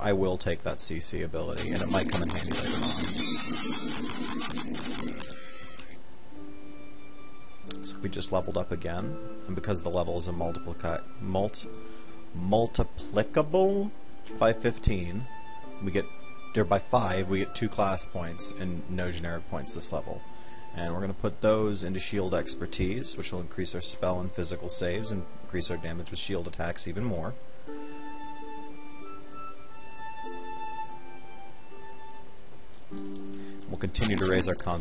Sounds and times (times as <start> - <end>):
Speech: 0.0 - 3.0, 7.7 - 11.7, 12.4 - 20.2, 20.8 - 27.4, 33.7 - 34.8
Music: 0.0 - 34.8.